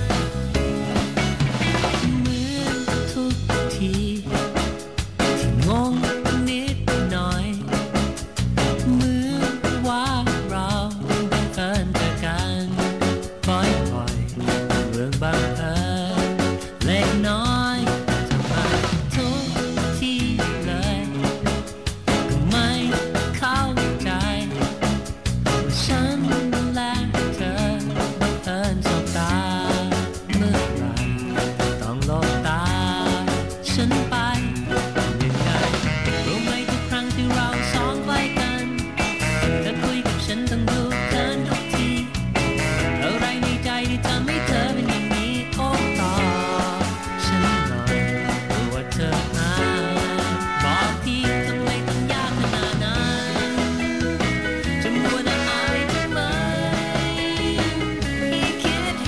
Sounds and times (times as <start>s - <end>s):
Music: 0.0s - 59.0s.